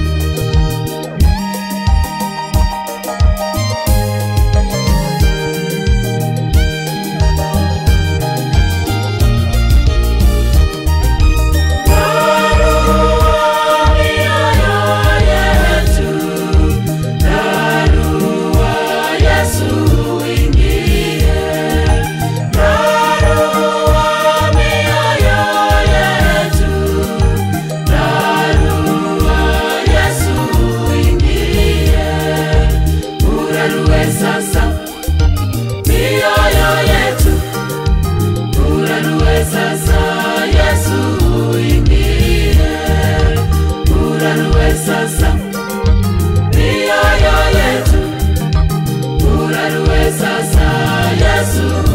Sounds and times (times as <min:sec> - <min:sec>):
Music: 0:00.0 - 0:51.9
Singing: 0:11.9 - 0:34.9, 0:49.2 - 0:51.9.